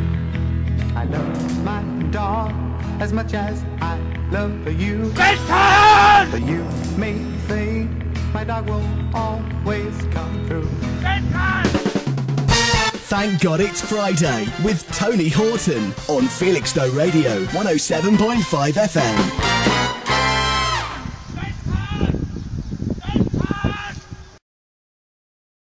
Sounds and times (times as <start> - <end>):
Music: 0.0 - 21.4
Speech: 13.1 - 19.3.